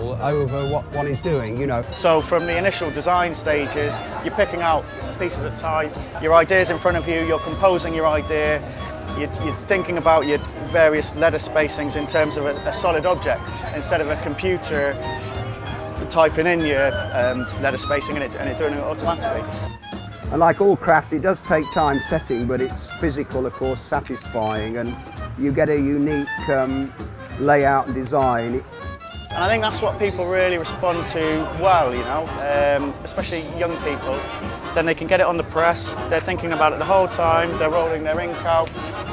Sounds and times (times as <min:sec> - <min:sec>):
Speech: 0:00.0 - 0:15.2, 0:16.0 - 0:19.5, 0:20.3 - 0:28.6, 0:29.4 - 0:39.1
Music: 0:00.0 - 0:39.1.